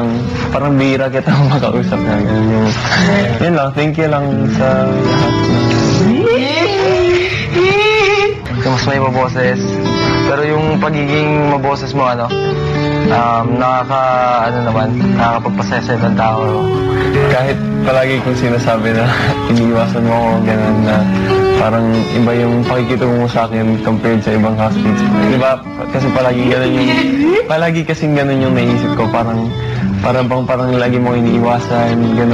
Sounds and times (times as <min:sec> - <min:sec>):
Male speech, man speaking: 0:00.0 - 0:06.2, 0:08.6 - 0:12.4, 0:13.1 - 0:16.6, 0:17.2 - 0:32.3
Music: 0:00.0 - 0:32.3.